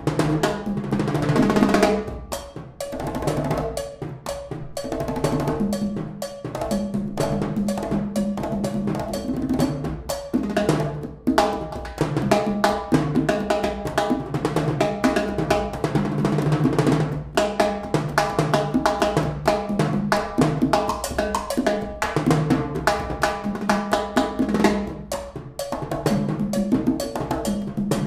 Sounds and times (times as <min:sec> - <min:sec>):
Percussion: 0:00.0 - 0:28.0.